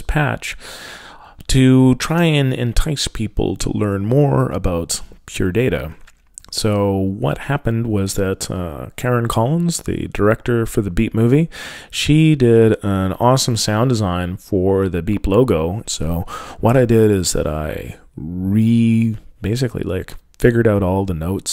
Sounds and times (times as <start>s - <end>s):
Speech: 0.0s - 0.6s, 1.4s - 21.5s.